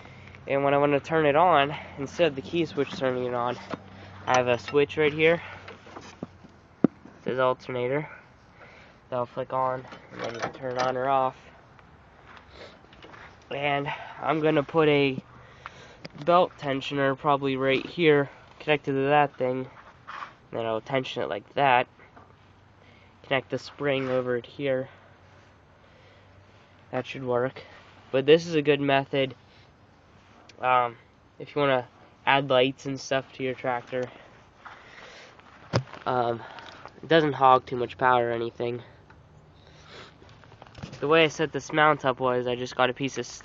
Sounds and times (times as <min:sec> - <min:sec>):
Speech: 0:00.5 - 0:05.5, 0:07.2 - 0:08.2, 0:09.1 - 0:11.5, 0:13.5 - 0:15.2, 0:16.2 - 0:19.8, 0:20.5 - 0:21.9, 0:23.2 - 0:25.0, 0:26.9 - 0:29.4, 0:30.5 - 0:34.2, 0:36.0 - 0:39.0, 0:41.0 - 0:43.4.